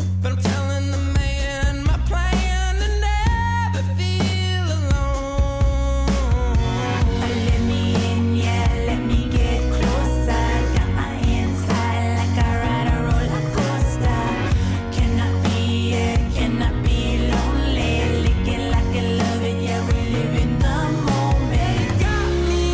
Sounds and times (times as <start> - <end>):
Independent music: 0.0 - 22.7.